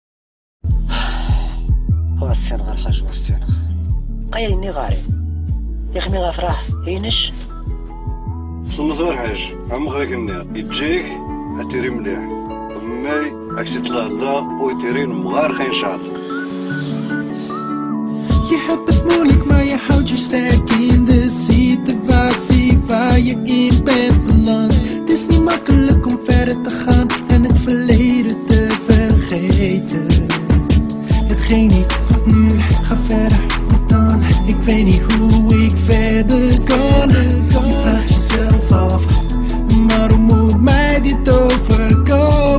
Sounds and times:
Music: 0.6s - 42.5s.

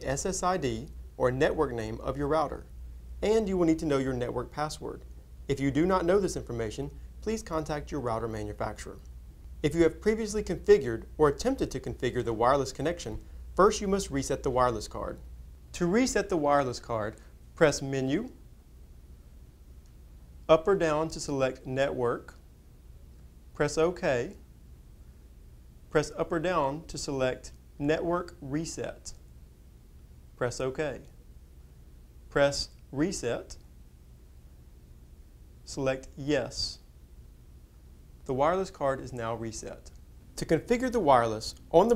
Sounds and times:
Speech: 0.0s - 18.4s, 20.5s - 22.4s, 23.6s - 24.4s, 25.9s - 29.2s, 30.4s - 31.2s, 32.3s - 33.6s, 35.6s - 36.9s, 38.3s - 41.9s.

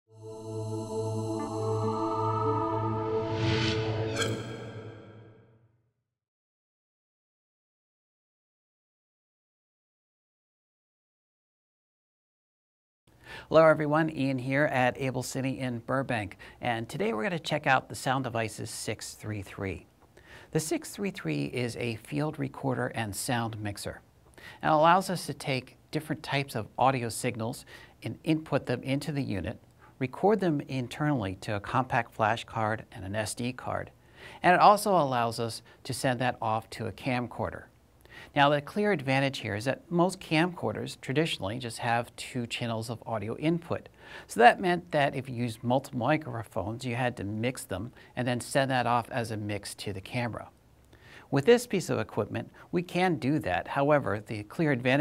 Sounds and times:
Speech: 13.5s - 19.9s, 20.5s - 37.7s, 38.3s - 50.6s, 51.3s - 55.0s.

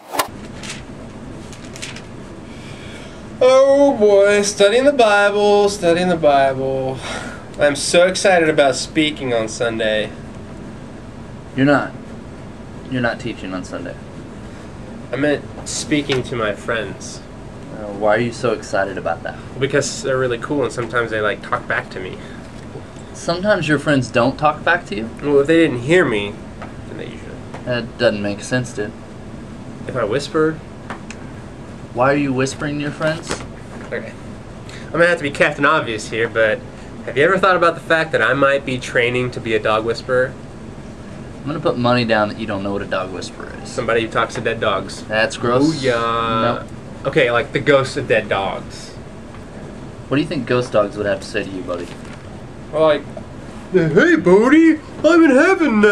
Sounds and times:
Speech: 3.4s - 7.0s, 7.6s - 10.2s, 12.9s - 14.0s, 15.1s - 22.3s, 23.2s - 29.0s, 29.9s - 30.6s, 32.0s - 34.2s, 34.9s - 40.4s, 41.4s - 49.0s, 50.1s - 52.0s, 52.7s - 53.1s, 53.8s - 55.9s.

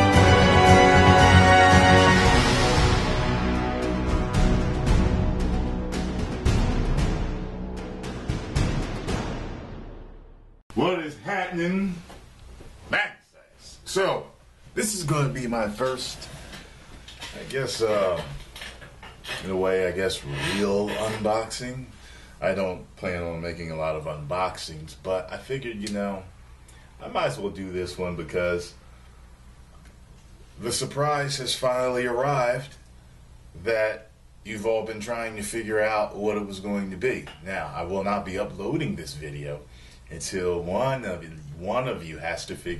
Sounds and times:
Speech: 10.7s - 12.1s, 12.9s - 16.3s, 17.3s - 18.4s, 19.3s - 26.3s, 27.0s - 28.8s, 30.6s - 32.8s, 33.6s - 42.7s.

